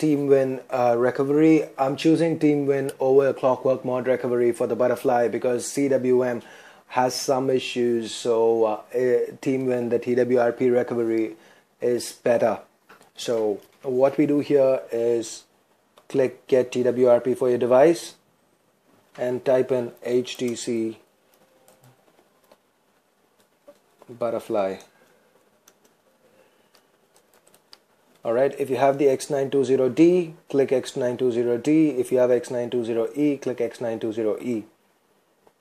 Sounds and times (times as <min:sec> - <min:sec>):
Speech: 0:00.0 - 0:15.5, 0:16.1 - 0:18.2, 0:19.2 - 0:21.1, 0:24.1 - 0:24.9, 0:28.2 - 0:34.8
Inside, small room: 0:00.0 - 0:35.6.